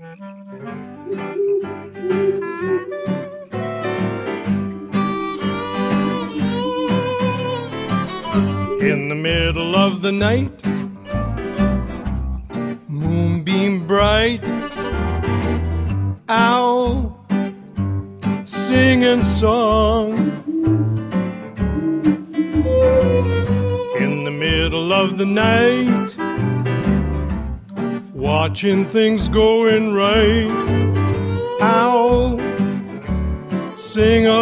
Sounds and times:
Music: 0:00.0 - 0:34.4.

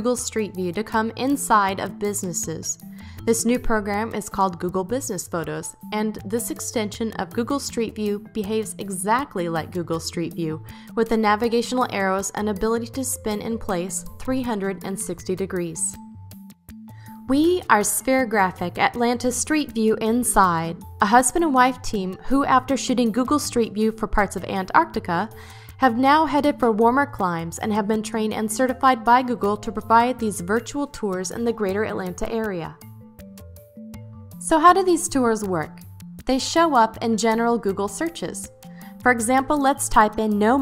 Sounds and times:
Speech: 0:00.0 - 0:16.0, 0:17.3 - 0:32.8, 0:34.4 - 0:38.5, 0:39.1 - 0:40.6
Music: 0:00.0 - 0:40.6.

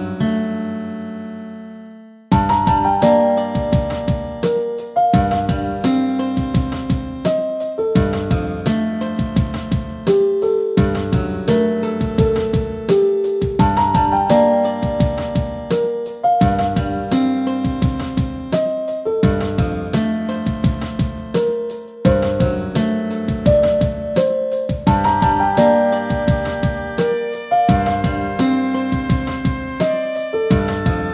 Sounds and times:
Music: 0:00.0 - 0:31.1.

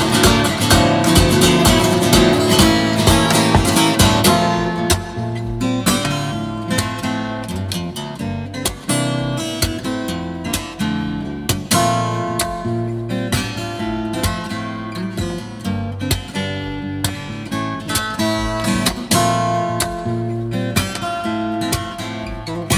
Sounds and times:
Acoustic guitar: 0:00.0 - 0:22.7.

